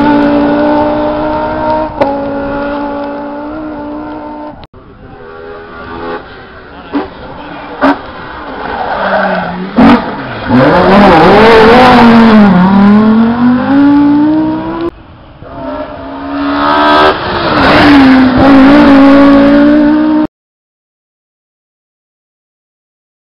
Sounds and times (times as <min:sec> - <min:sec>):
Accelerating, revving, vroom: 0:00.0 - 0:04.6, 0:09.8 - 0:14.9, 0:15.5 - 0:20.3
Car: 0:00.0 - 0:20.3.